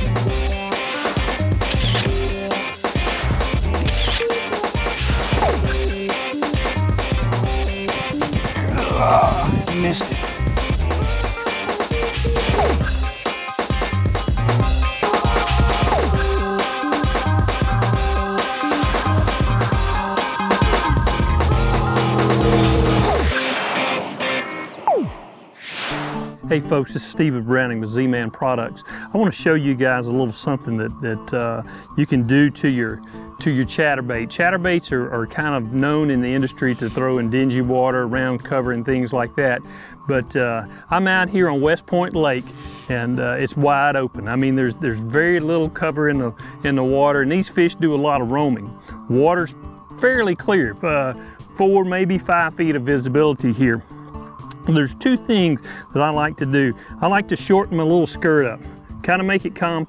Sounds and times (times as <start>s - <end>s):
Music: 0.0s - 59.8s
Speech: 8.6s - 10.2s, 26.4s - 53.8s, 54.6s - 59.8s.